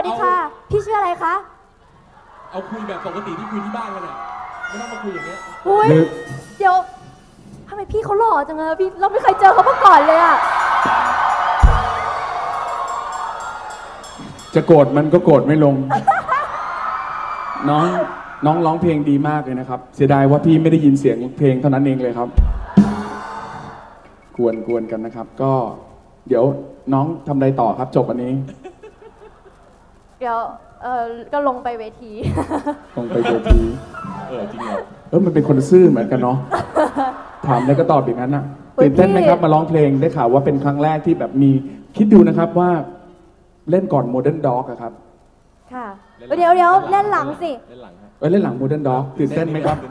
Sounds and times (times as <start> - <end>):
Music: 4.6 - 7.2, 10.4 - 15.2, 22.6 - 25.1.